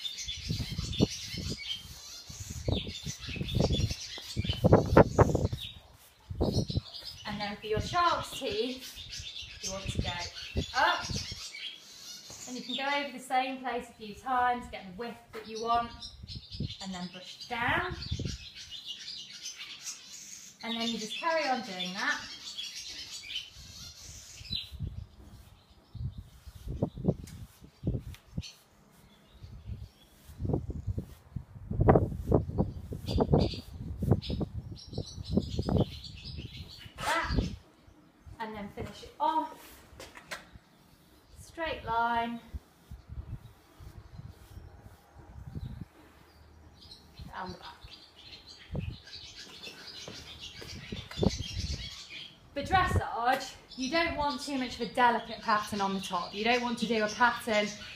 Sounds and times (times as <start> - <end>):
Chirp, tweet: 0.0 - 12.9, 15.4 - 31.0, 32.4 - 39.1, 42.4 - 52.5, 53.3 - 57.9
Speech: 7.3 - 8.9, 9.6 - 11.2, 12.5 - 16.0, 16.8 - 18.0, 20.6 - 22.3, 37.0 - 37.5, 38.4 - 39.6, 41.4 - 42.5, 47.3 - 47.9, 52.6 - 57.8.